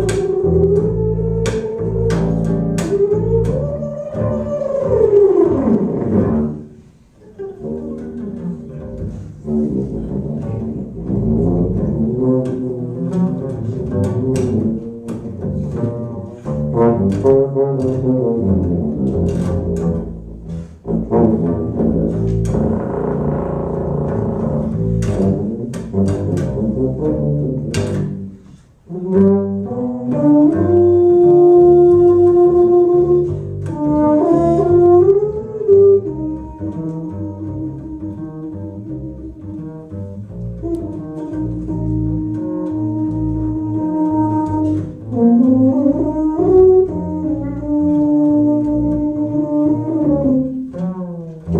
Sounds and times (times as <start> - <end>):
Cello: 0.0 - 51.5
Pizzicato: 0.0 - 51.5.